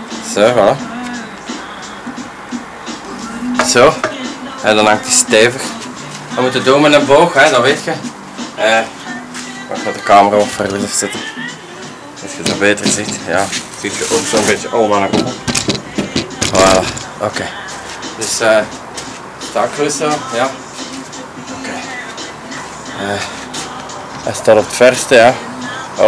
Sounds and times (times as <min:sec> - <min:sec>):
Music: 0:00.0 - 0:26.0
Speech: 0:06.4 - 0:08.0, 0:12.4 - 0:15.3, 0:18.2 - 0:18.7, 0:19.6 - 0:20.6, 0:24.3 - 0:25.4.